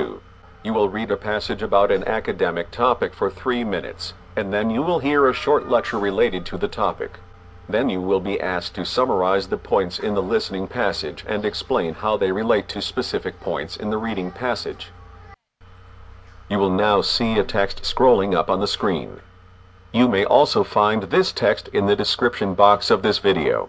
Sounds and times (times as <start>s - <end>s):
Speech: 0.0s - 15.3s, 16.5s - 19.2s, 20.0s - 23.6s.